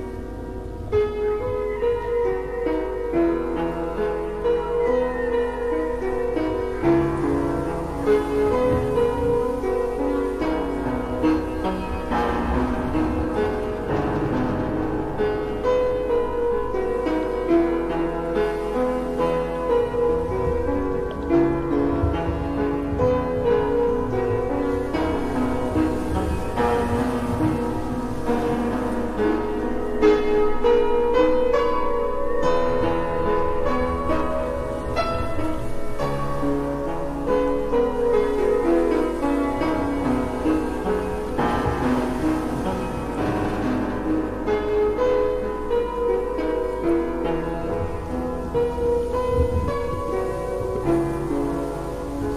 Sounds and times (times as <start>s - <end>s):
Music: 0.0s - 52.3s.